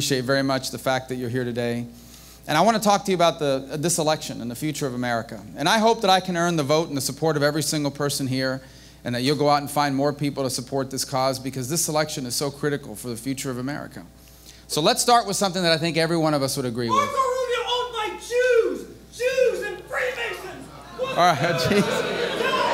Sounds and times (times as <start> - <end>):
Male speech, man speaking: 0.0 - 1.9, 2.5 - 14.1, 14.7 - 22.7.